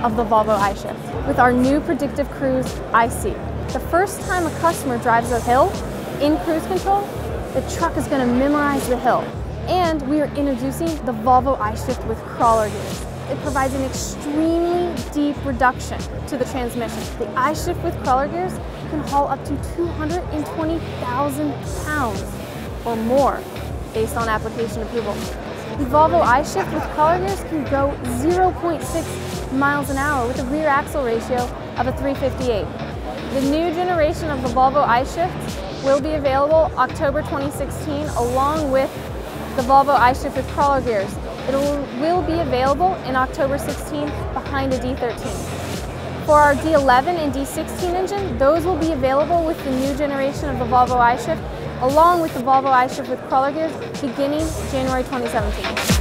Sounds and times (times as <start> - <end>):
Speech: 0.0 - 22.3, 22.9 - 32.7, 33.3 - 39.0, 39.6 - 45.5, 46.2 - 55.8
Music: 0.0 - 56.0.